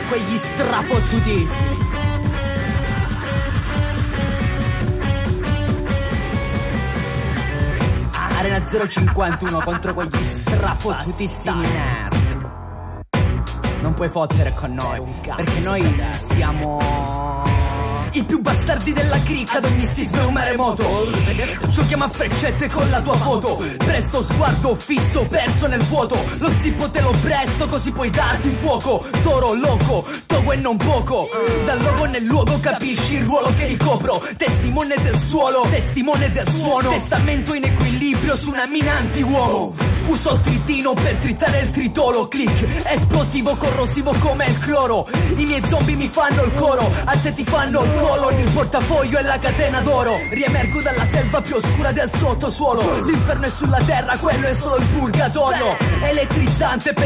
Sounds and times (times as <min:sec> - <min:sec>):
Rapping: 0:00.0 - 0:02.0, 0:08.0 - 0:12.5, 0:13.8 - 0:57.0
Hip hop music: 0:00.0 - 0:57.0.